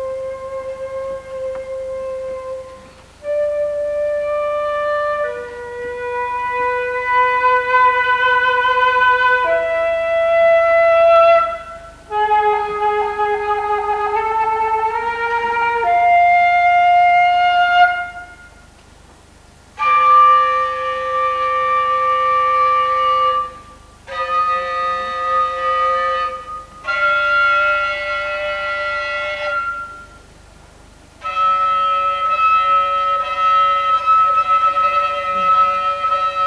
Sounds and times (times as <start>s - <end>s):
Classical music: 0.0s - 18.6s, 31.2s - 36.4s
Flute: 0.0s - 18.8s, 19.7s - 30.4s, 31.2s - 36.4s
Inside, large room or hall: 0.0s - 36.4s.